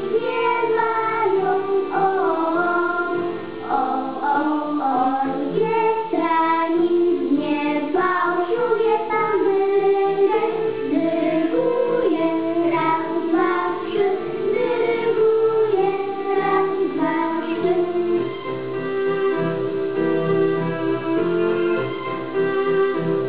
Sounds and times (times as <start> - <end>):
Music for children: 0.0 - 23.2
Female singing: 0.2 - 18.2.